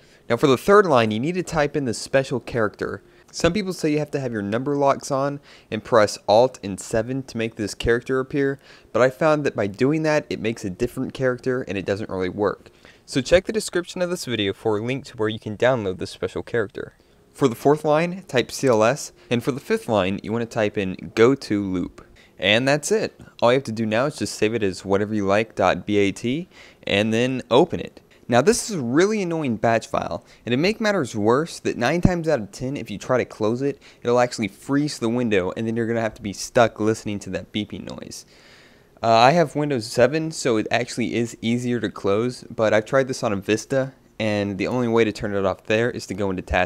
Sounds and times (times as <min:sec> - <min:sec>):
Speech: 0:00.3 - 0:38.3, 0:39.0 - 0:46.6.